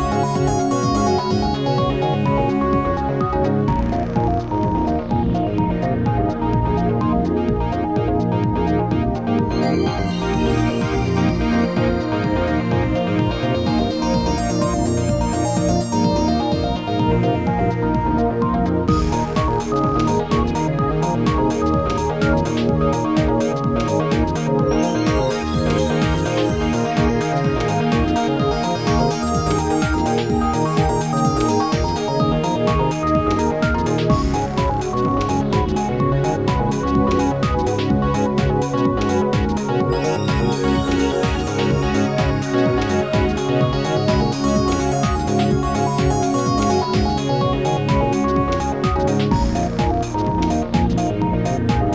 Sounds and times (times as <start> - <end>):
Music: 0.0 - 51.9.